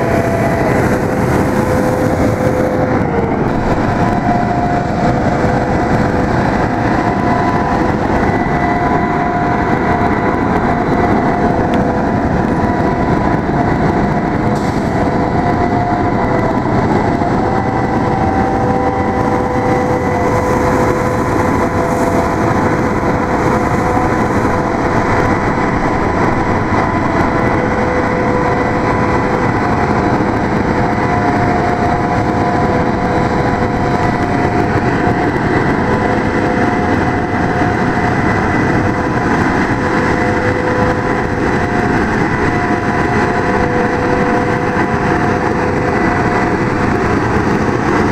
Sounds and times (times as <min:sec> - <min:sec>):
Truck: 0:00.0 - 0:48.1.